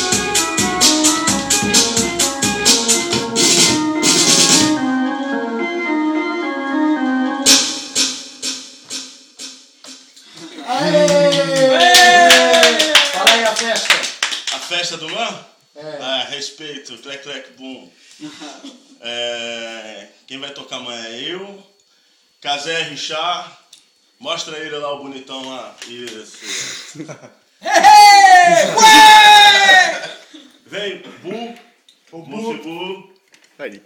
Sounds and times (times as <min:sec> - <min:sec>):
Speech: 0:30.7 - 0:33.8.